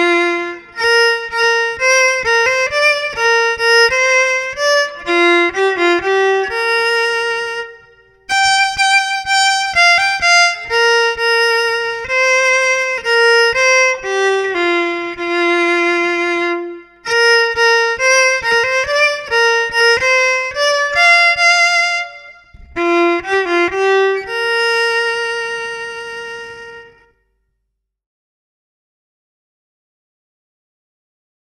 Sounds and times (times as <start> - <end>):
Violin, fiddle: 0.0 - 27.1.